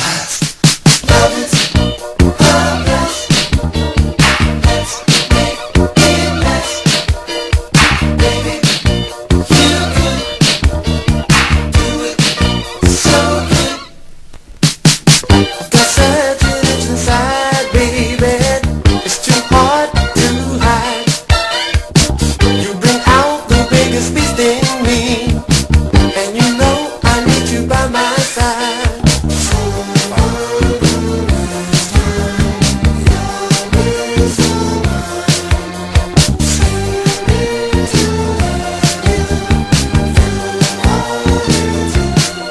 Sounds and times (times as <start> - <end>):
Music: 0.0 - 42.5.